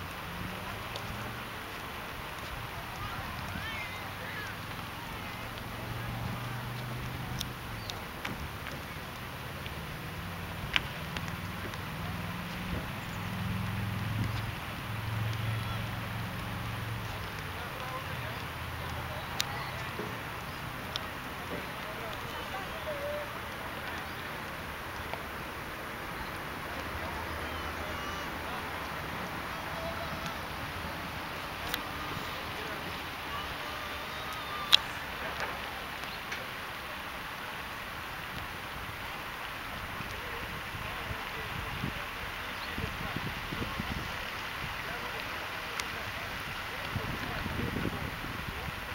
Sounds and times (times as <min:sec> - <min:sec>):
Boat, Water vehicle: 0:00.0 - 0:48.9
Rustling leaves: 0:00.0 - 0:48.9
Speech: 0:00.6 - 0:07.4, 0:15.3 - 0:16.1, 0:16.9 - 0:25.3, 0:26.1 - 0:37.2, 0:39.0 - 0:48.9.